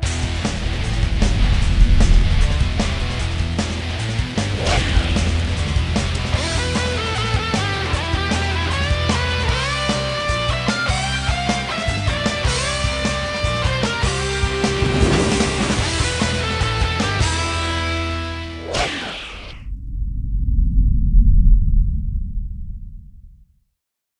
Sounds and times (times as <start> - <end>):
Music: 0.0 - 19.5.